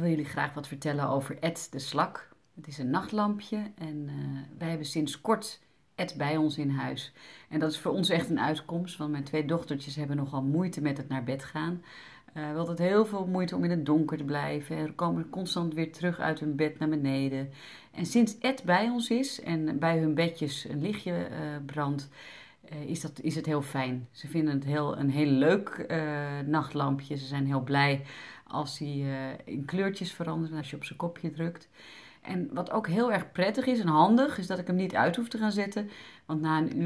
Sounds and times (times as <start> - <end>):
Speech: 0.0 - 22.1, 22.7 - 36.8.